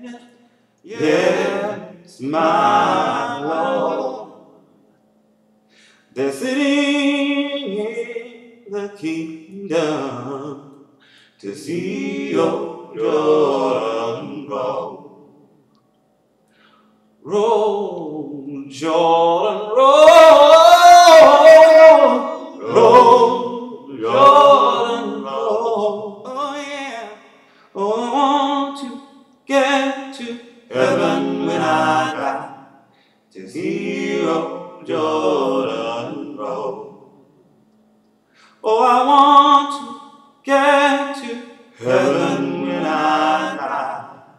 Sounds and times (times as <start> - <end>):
Chant: 0.0 - 4.6, 17.2 - 37.2, 38.6 - 44.3
A capella: 0.0 - 4.8, 5.7 - 15.6, 16.8 - 44.3.